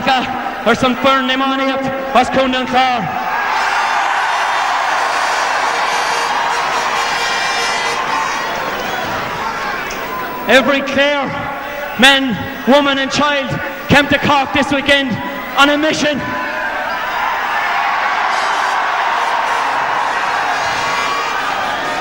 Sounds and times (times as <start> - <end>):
Male speech, man speaking: 0.0 - 3.1, 10.5 - 16.3
Narration, monologue: 0.0 - 3.2, 10.5 - 16.3.